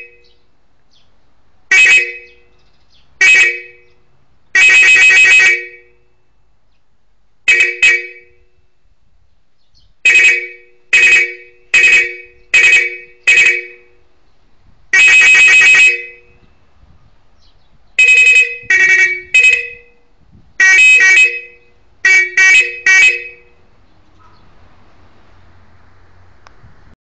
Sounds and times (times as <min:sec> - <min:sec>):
Outside, rural or natural: 0:00.0 - 0:27.0
Vehicle horn, car horn, honking: 0:01.7 - 0:02.5, 0:03.2 - 0:04.0, 0:04.6 - 0:06.3, 0:07.5 - 0:08.8, 0:10.1 - 0:14.0, 0:15.0 - 0:16.6, 0:18.0 - 0:23.6.